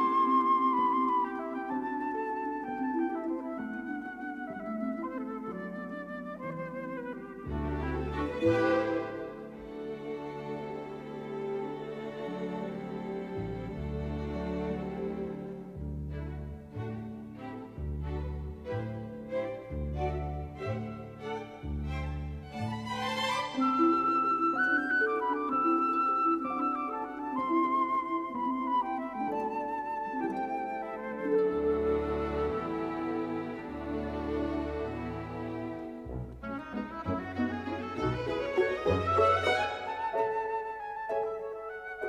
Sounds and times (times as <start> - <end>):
Music: 0.0 - 42.0.